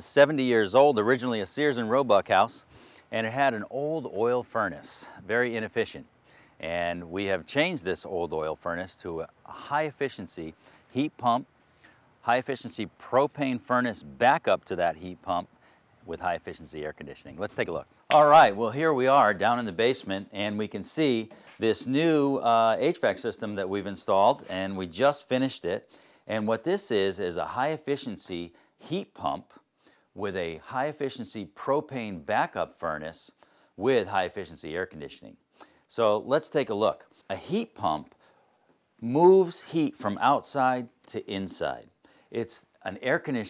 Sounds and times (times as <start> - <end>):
Speech: 0.0 - 11.5, 12.2 - 15.5, 16.1 - 29.6, 30.2 - 38.2, 39.0 - 43.4.